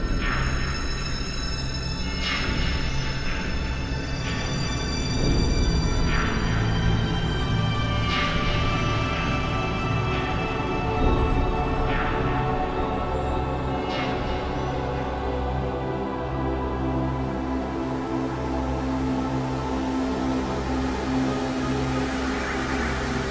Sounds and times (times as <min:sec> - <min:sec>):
Music: 0:00.0 - 0:23.3.